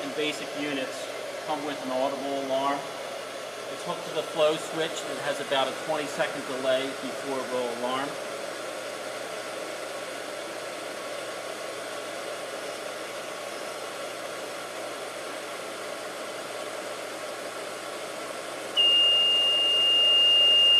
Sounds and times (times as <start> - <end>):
Speech: 0.0 - 2.9, 3.7 - 8.2.